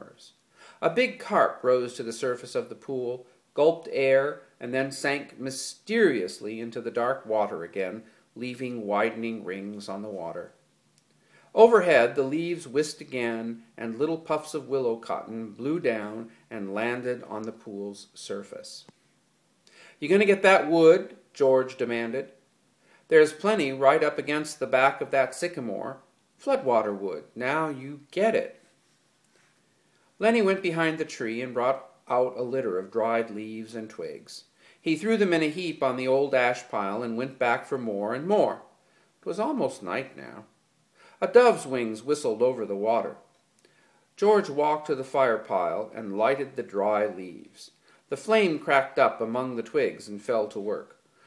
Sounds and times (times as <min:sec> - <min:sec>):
Speech: 0:00.0 - 0:10.6, 0:11.6 - 0:18.9, 0:20.0 - 0:22.4, 0:23.1 - 0:28.6, 0:30.2 - 0:40.5, 0:41.2 - 0:43.3, 0:44.2 - 0:51.0.